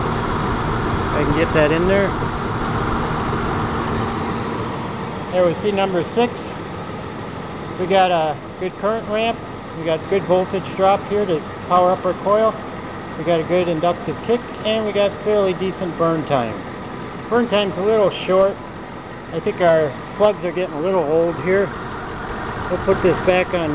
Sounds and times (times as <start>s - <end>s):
Speech: 1.2s - 2.2s, 5.3s - 6.6s, 7.8s - 12.6s, 13.2s - 16.6s, 17.3s - 18.6s, 19.3s - 21.7s, 22.7s - 23.7s.